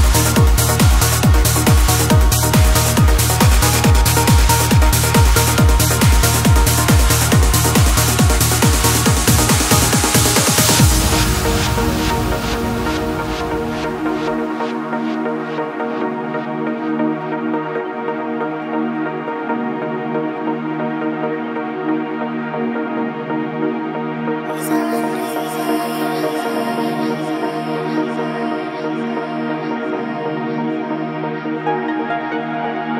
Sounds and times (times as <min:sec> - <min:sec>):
Trance music: 0:00.0 - 0:32.9.